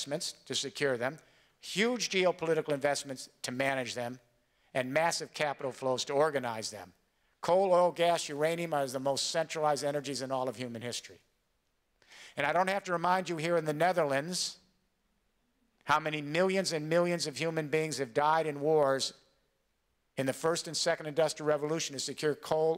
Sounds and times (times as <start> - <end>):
Male speech, man speaking: 0.0 - 4.2, 4.8 - 11.2, 12.4 - 14.6, 15.9 - 19.2, 20.2 - 22.7.